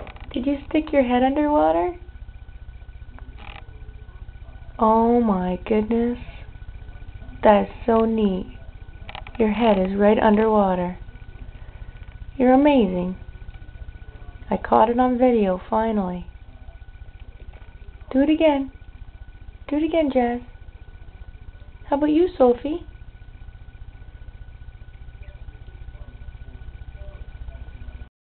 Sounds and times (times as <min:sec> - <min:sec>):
Speech: 0:00.3 - 0:02.1, 0:03.2 - 0:11.6, 0:12.4 - 0:19.0, 0:19.6 - 0:23.0.